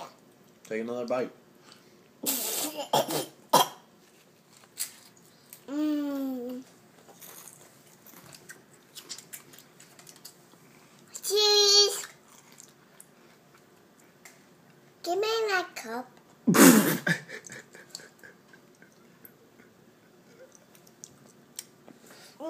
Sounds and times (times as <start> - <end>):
Inside, small room: 0.0 - 22.4
Child speech, kid speaking: 11.2 - 12.2, 15.0 - 16.2.